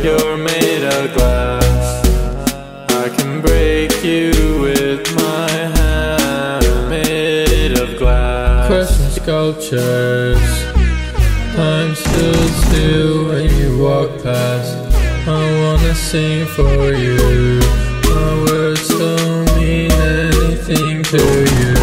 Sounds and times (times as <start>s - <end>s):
Music: 0.0s - 21.8s.